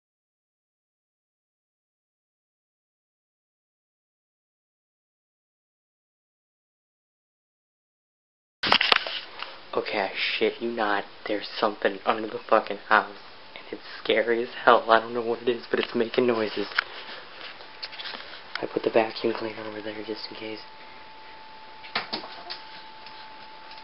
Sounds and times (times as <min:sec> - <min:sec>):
Speech: 0:09.7 - 0:16.8, 0:18.6 - 0:20.7.